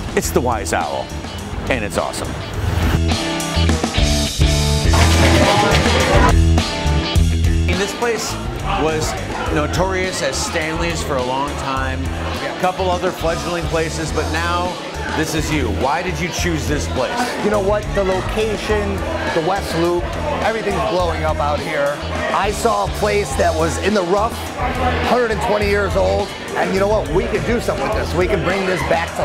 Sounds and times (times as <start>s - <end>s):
Music: 0.0s - 29.2s
Speech: 0.1s - 1.1s, 1.7s - 2.4s, 7.7s - 29.2s.